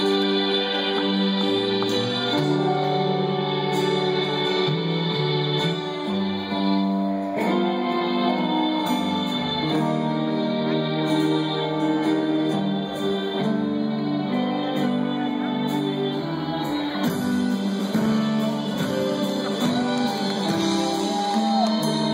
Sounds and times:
Music: 0:00.0 - 0:22.1
Shout: 0:16.1 - 0:18.2, 0:18.8 - 0:22.1.

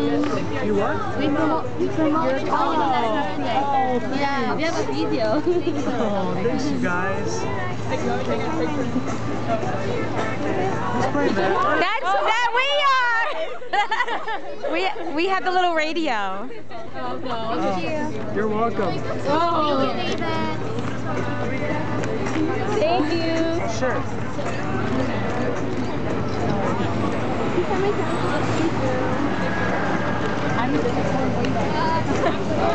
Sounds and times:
Music: 0:05.8 - 0:11.7, 0:18.0 - 0:28.4.

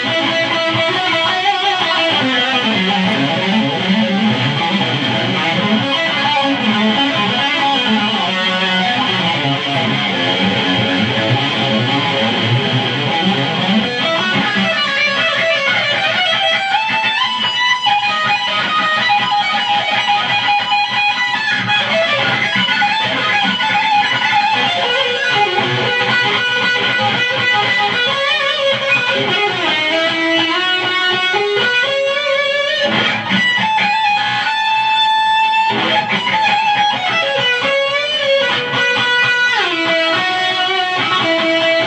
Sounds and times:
Electric guitar: 0:00.0 - 0:41.8.

